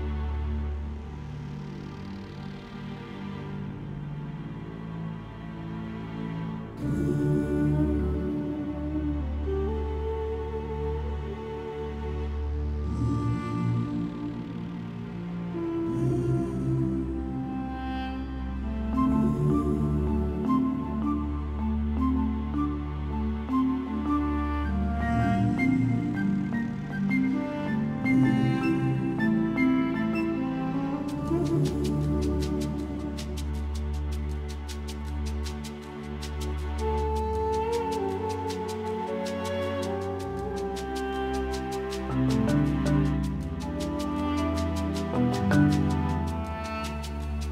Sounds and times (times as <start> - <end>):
Music: 0.0 - 47.5.